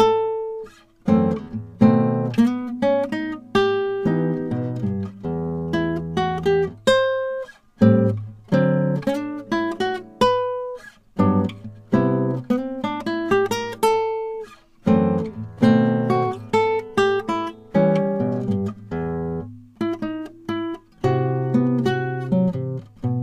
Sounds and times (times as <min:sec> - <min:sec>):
Acoustic guitar: 0:00.0 - 0:23.2
Strum: 0:00.0 - 0:23.2.